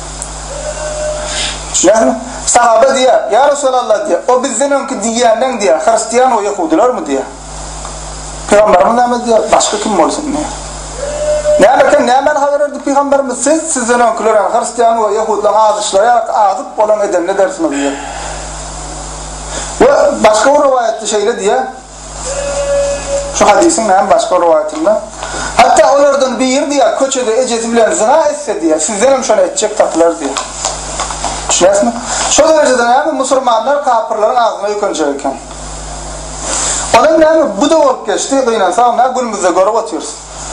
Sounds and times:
Speech: 0:01.7 - 0:07.4, 0:08.5 - 0:10.6, 0:11.6 - 0:18.0, 0:19.8 - 0:21.9, 0:23.3 - 0:30.4, 0:31.5 - 0:35.5, 0:36.9 - 0:40.2.

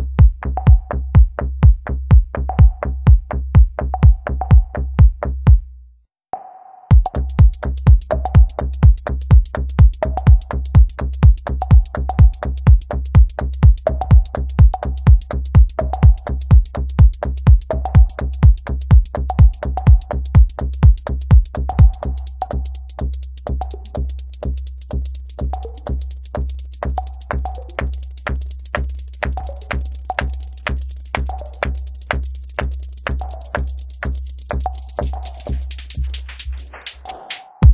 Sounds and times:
Techno: 0:06.9 - 0:37.7.

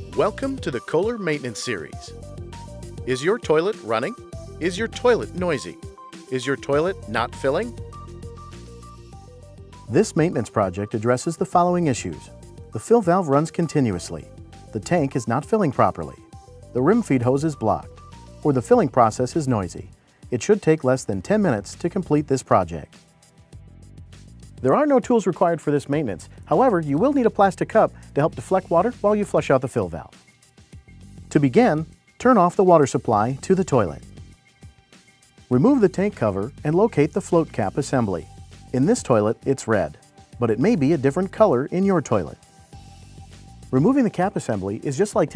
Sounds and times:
Music: 0:00.0 - 0:45.3
Speech: 0:00.2 - 0:02.1, 0:03.1 - 0:07.8, 0:09.9 - 0:16.2, 0:16.8 - 0:22.9, 0:24.6 - 0:30.1, 0:31.3 - 0:34.0, 0:35.5 - 0:38.2, 0:38.8 - 0:42.4, 0:43.7 - 0:45.3.

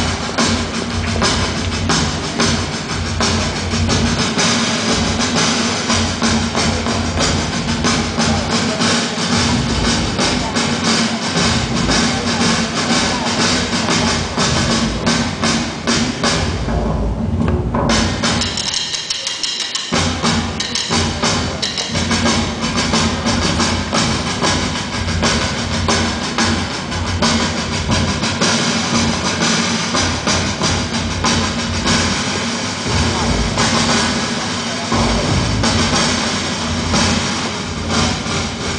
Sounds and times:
Music: 0:00.0 - 0:38.7.

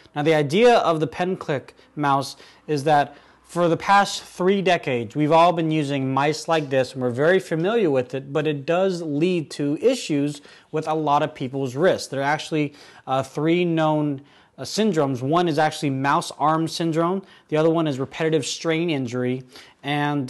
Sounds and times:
Speech: 0:00.0 - 0:20.3.

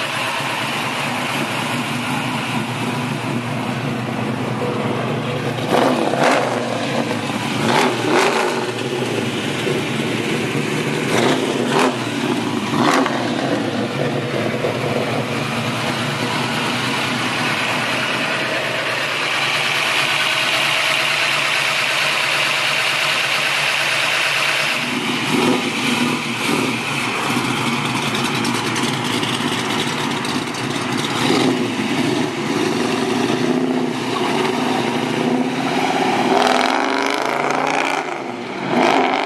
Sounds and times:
Car: 0:00.0 - 0:39.2
Outside, urban or manmade: 0:00.0 - 0:39.2
Accelerating, revving, vroom: 0:05.6 - 0:08.9, 0:11.1 - 0:13.8, 0:24.8 - 0:26.8, 0:31.2 - 0:39.2.

